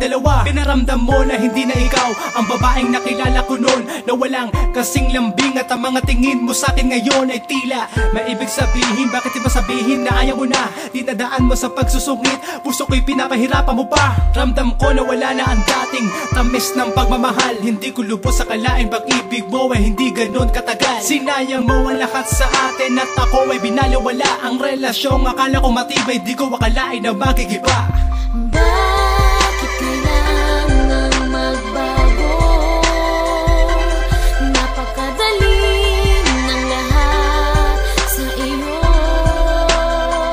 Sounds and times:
Rhythm and blues: 0:00.0 - 0:40.3.

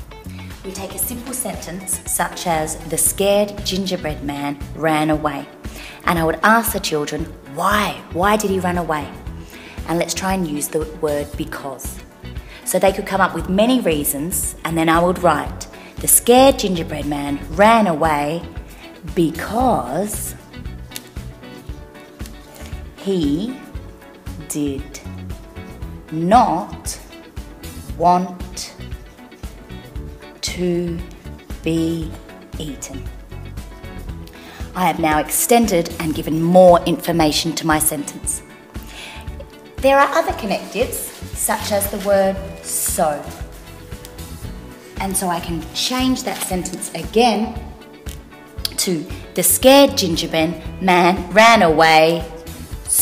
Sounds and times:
Music: 0:00.0 - 0:53.0
Speech: 0:00.7 - 0:09.2, 0:09.9 - 0:12.0, 0:12.7 - 0:18.5, 0:19.1 - 0:20.4, 0:23.0 - 0:23.6, 0:24.4 - 0:25.1, 0:26.1 - 0:27.0, 0:28.0 - 0:28.8, 0:30.4 - 0:33.1, 0:34.8 - 0:38.4, 0:39.8 - 0:43.4, 0:45.0 - 0:47.7, 0:48.7 - 0:52.3.

